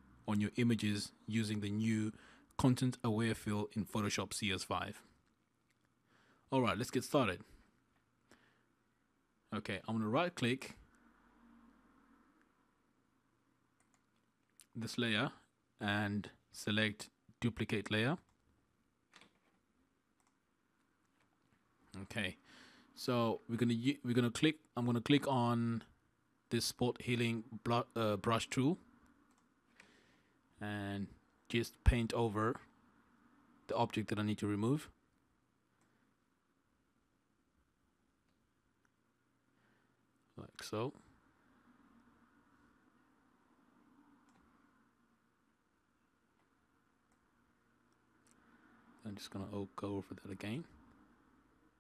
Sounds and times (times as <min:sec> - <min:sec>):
Speech: 0:00.2 - 0:05.1, 0:06.5 - 0:07.6, 0:09.5 - 0:10.9, 0:14.6 - 0:18.3, 0:21.9 - 0:22.4, 0:23.0 - 0:28.9, 0:30.6 - 0:32.7, 0:33.7 - 0:35.0, 0:40.3 - 0:41.1, 0:49.0 - 0:50.8.